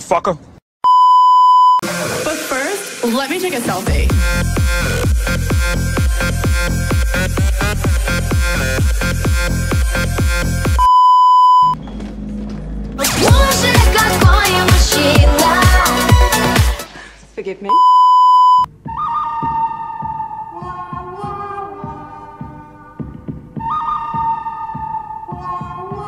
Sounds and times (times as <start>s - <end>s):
Music: 1.8s - 10.8s, 11.9s - 17.0s, 18.7s - 26.0s.